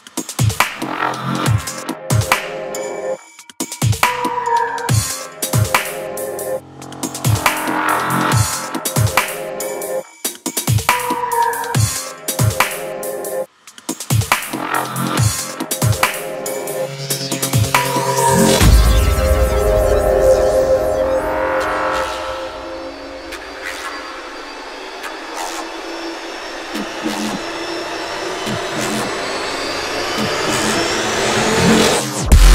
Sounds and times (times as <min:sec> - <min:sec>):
Dubstep: 0:03.8 - 0:32.5.